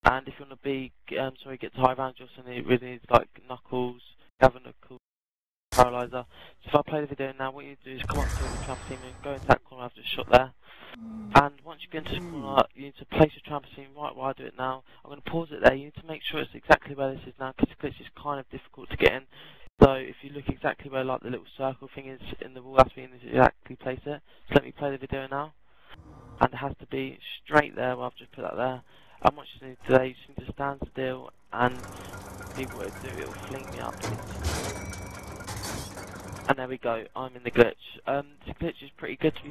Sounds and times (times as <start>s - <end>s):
Speech: 0.0s - 5.0s, 5.8s - 25.6s, 26.4s - 32.0s, 32.6s - 34.3s, 36.5s - 39.5s.